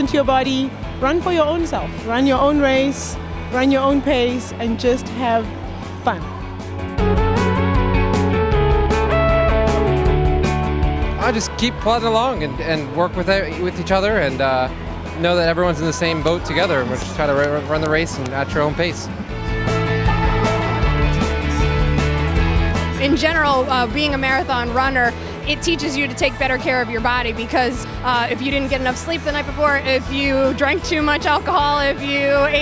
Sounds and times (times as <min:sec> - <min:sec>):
Music: 0:00.0 - 0:32.6.